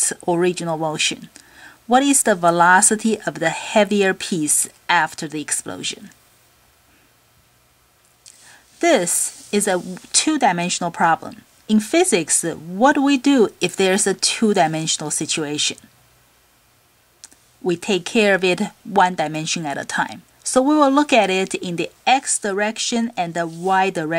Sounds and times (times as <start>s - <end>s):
Speech: 0.0s - 1.3s, 1.9s - 6.2s, 8.8s - 15.9s, 17.6s - 24.1s.